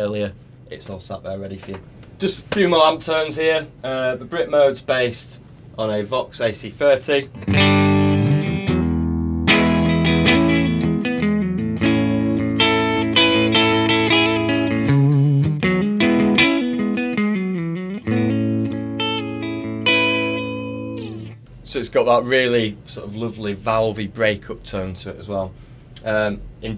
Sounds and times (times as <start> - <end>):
Guitar: 7.2 - 21.6.